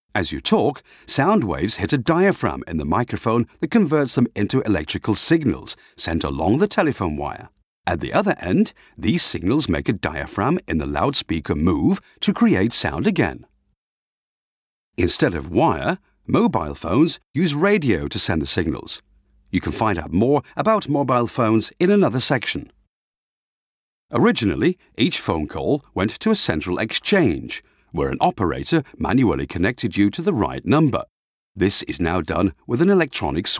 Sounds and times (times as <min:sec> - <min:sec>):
Speech: 0:00.1 - 0:13.5, 0:15.0 - 0:22.7, 0:24.1 - 0:33.5.